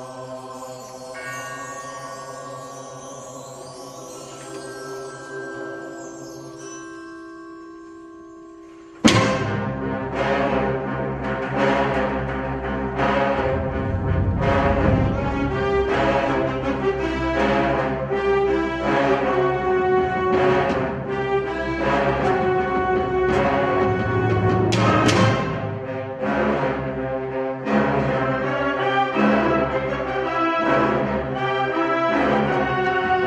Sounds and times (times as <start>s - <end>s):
Percussion: 0.0s - 33.2s.